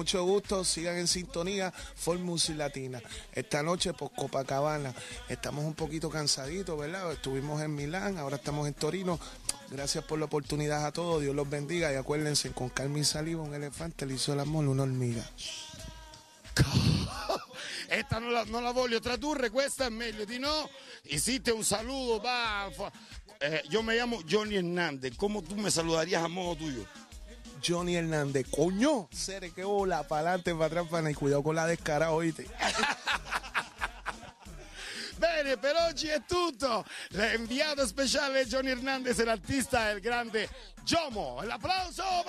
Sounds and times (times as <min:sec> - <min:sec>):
Speech: 0:00.0 - 0:15.6, 0:17.9 - 0:26.9, 0:27.6 - 0:32.9, 0:35.2 - 0:42.2
Music: 0:00.0 - 0:42.2.